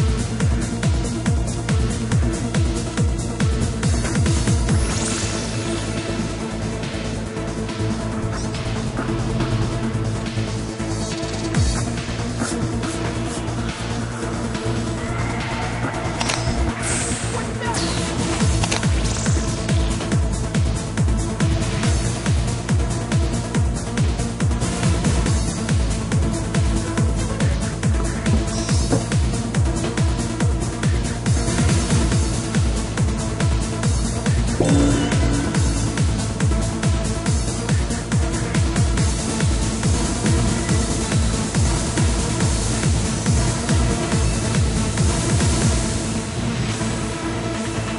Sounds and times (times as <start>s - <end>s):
Techno: 0.0s - 46.4s.